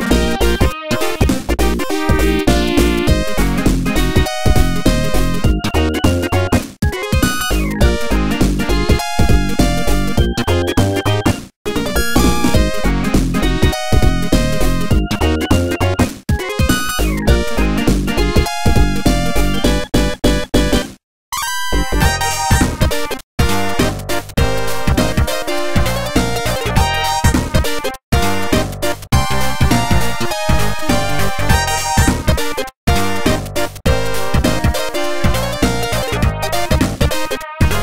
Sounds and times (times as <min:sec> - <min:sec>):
Rhythm and blues: 0:00.0 - 0:21.0, 0:21.6 - 0:37.8.